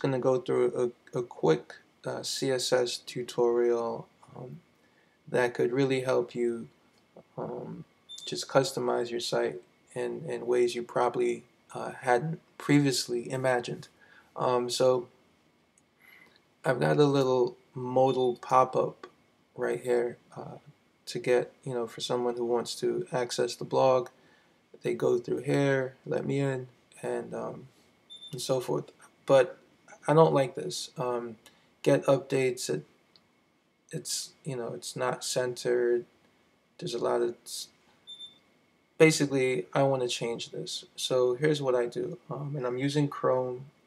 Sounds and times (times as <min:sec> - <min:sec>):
Speech: 0:00.0 - 0:04.6, 0:05.3 - 0:15.1, 0:16.6 - 0:24.2, 0:24.8 - 0:27.7, 0:28.4 - 0:32.9, 0:33.9 - 0:36.1, 0:36.8 - 0:37.8, 0:39.0 - 0:43.8.